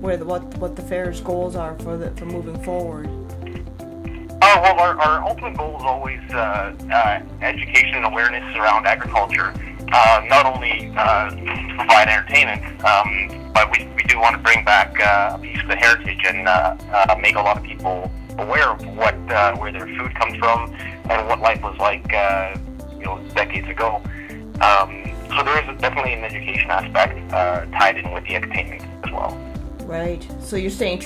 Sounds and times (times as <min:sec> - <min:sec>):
Speech: 0:00.0 - 0:03.1, 0:04.1 - 0:31.0
Music: 0:00.0 - 0:31.0.